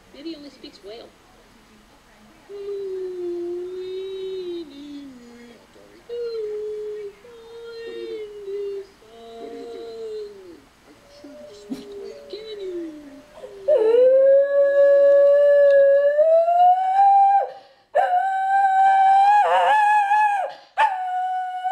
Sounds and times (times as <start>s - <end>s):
Speech: 0.1s - 13.7s.